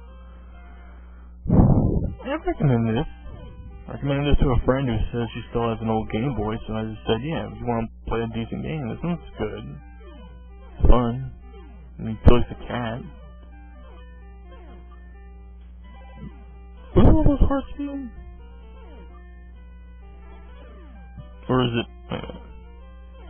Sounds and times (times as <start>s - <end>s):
Music: 0.0s - 1.4s, 2.0s - 23.2s
Speech: 3.9s - 9.8s, 17.0s - 18.1s, 21.5s - 21.9s.